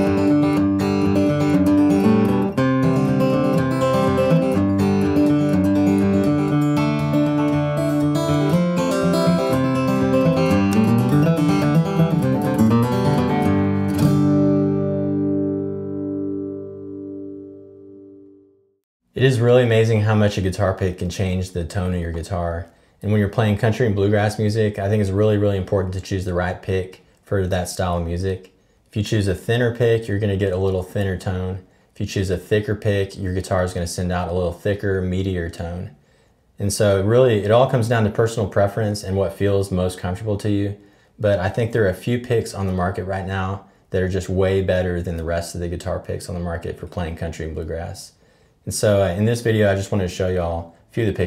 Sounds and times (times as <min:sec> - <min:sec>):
Speech: 0:19.2 - 0:36.0, 0:36.6 - 0:51.2.